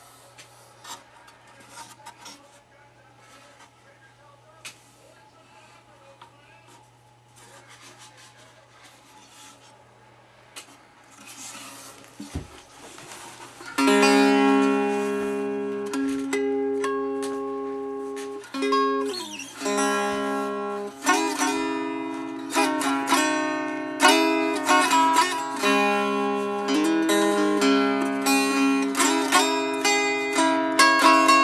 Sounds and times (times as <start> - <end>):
Strum: 10.6 - 31.4.